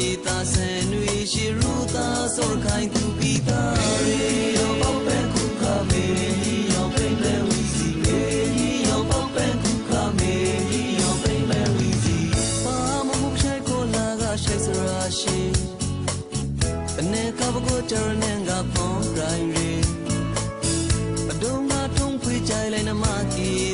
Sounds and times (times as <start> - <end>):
New-age music: 0.0 - 23.7.